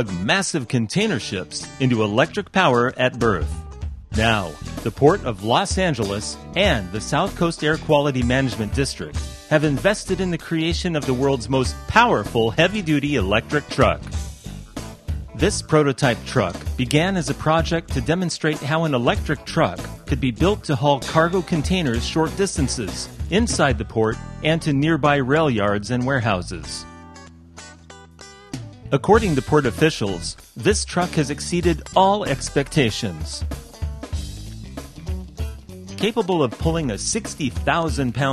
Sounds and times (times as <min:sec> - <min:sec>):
Speech: 0:00.0 - 0:03.6, 0:04.2 - 0:14.1, 0:15.4 - 0:26.9, 0:28.9 - 0:33.5, 0:36.0 - 0:38.3
Music: 0:00.0 - 0:38.3.